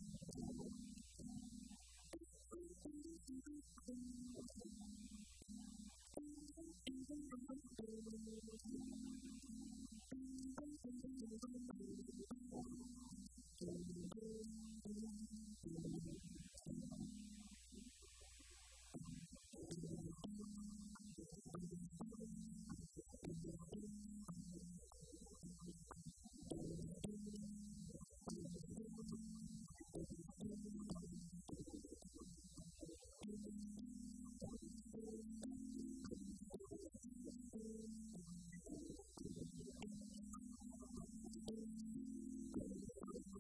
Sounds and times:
Guitar: 0:00.0 - 0:18.0, 0:18.9 - 0:43.4.

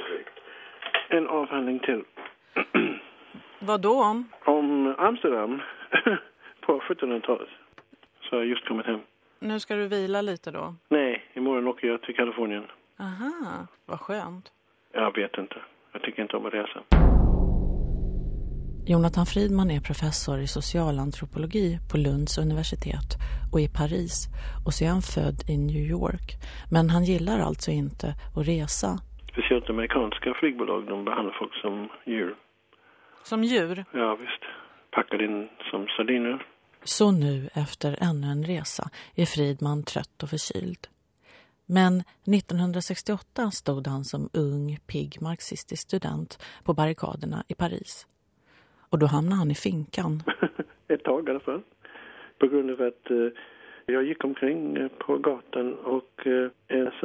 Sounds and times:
Speech: 0:01.1 - 0:16.9, 0:18.9 - 0:32.5, 0:33.3 - 0:40.9, 0:41.7 - 0:48.1, 0:49.0 - 0:51.7, 0:52.4 - 0:57.0.

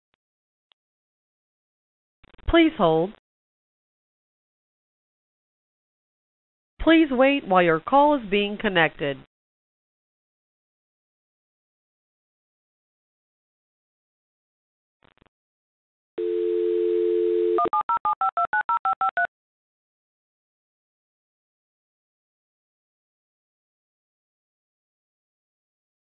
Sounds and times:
Speech: 0:02.5 - 0:03.2, 0:06.8 - 0:09.3.

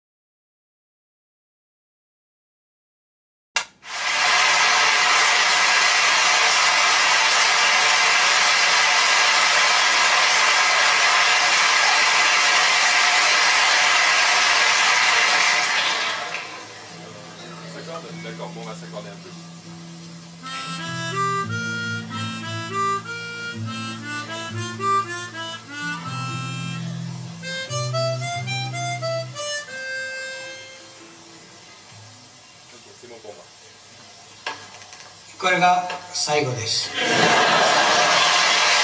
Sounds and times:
Wind instrument, woodwind instrument: 0:20.4 - 0:31.0
Harmonica: 0:20.4 - 0:31.3.

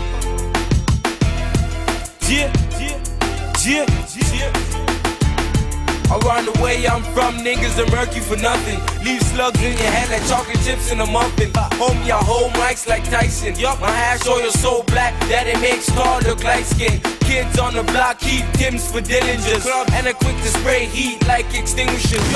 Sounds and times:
Music: 0:00.0 - 0:22.3.

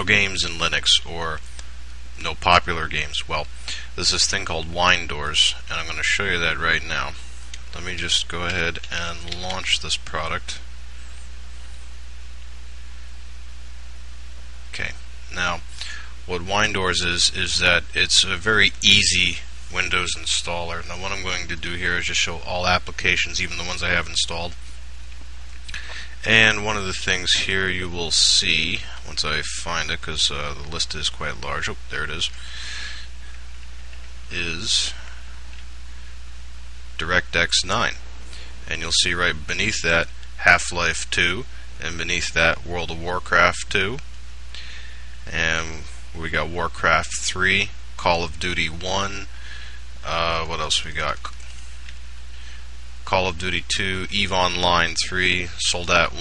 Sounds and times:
Speech: 0:00.0 - 0:01.4, 0:02.2 - 0:10.7, 0:14.7 - 0:15.7, 0:16.3 - 0:24.6, 0:26.2 - 0:32.4, 0:34.3 - 0:35.1, 0:37.0 - 0:38.0, 0:38.7 - 0:44.1, 0:45.3 - 0:49.3, 0:50.0 - 0:51.4, 0:53.0 - 0:56.2.

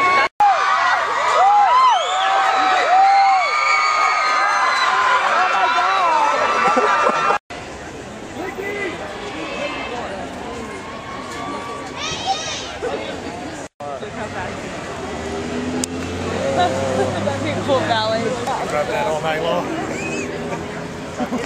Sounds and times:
Outside, urban or manmade: 0:00.0 - 0:21.4.

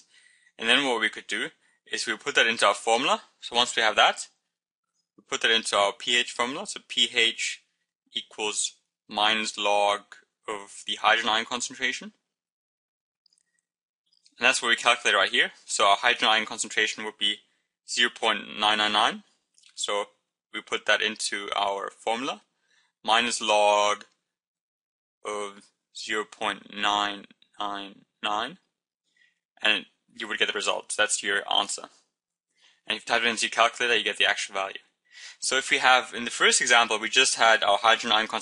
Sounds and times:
Speech: 0:00.6 - 0:04.4, 0:05.2 - 0:12.2, 0:14.4 - 0:22.5, 0:23.1 - 0:24.2, 0:25.3 - 0:28.6, 0:29.6 - 0:32.0, 0:32.9 - 0:38.4.

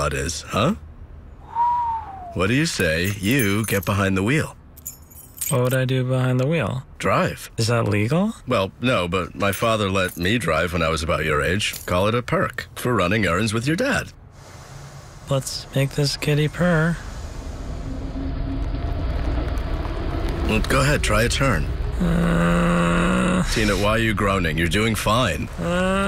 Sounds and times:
Speech: 0:00.0 - 0:00.8, 0:02.3 - 0:04.6, 0:05.5 - 0:14.2, 0:15.3 - 0:17.0, 0:20.5 - 0:25.5.

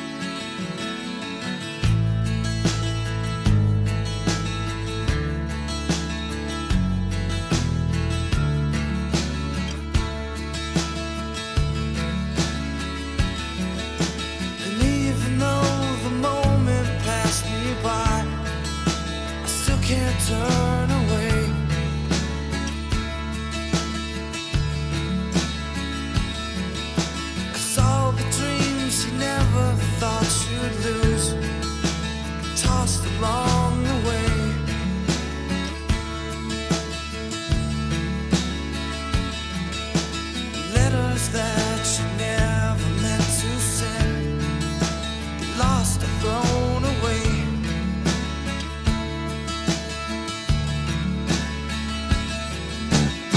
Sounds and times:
Acoustic guitar: 0:00.0 - 0:53.3.

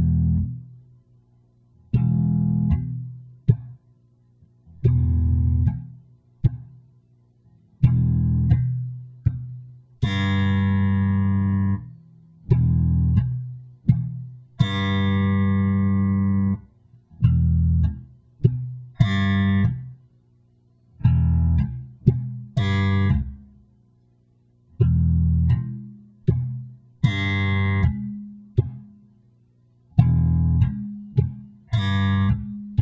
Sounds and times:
Bass guitar: 0:00.0 - 0:00.9, 0:01.8 - 0:20.1, 0:21.0 - 0:23.7, 0:24.7 - 0:29.2, 0:29.9 - 0:32.8.

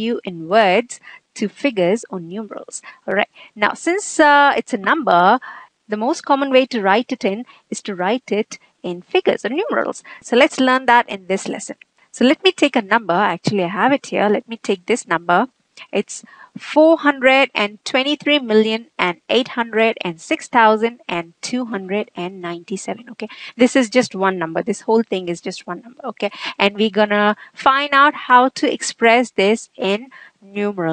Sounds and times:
Speech: 0:00.0 - 0:30.9.

